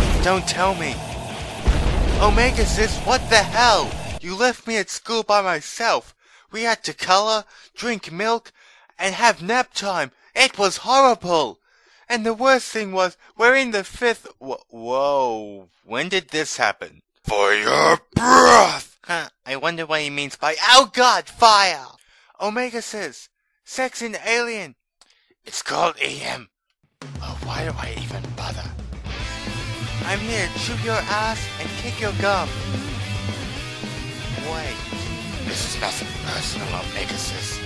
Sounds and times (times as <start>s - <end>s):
Speech: 0.0s - 1.0s, 2.2s - 24.8s, 25.5s - 26.5s, 27.2s - 28.8s, 30.0s - 32.5s, 34.4s - 34.8s, 35.5s - 37.6s.